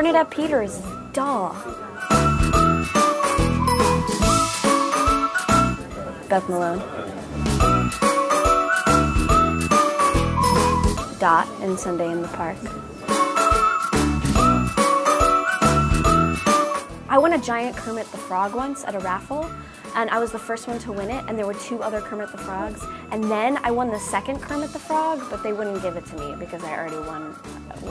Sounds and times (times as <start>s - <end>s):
Music: 0.0s - 27.9s
Speech: 5.9s - 7.2s, 11.2s - 12.7s, 17.1s - 27.9s.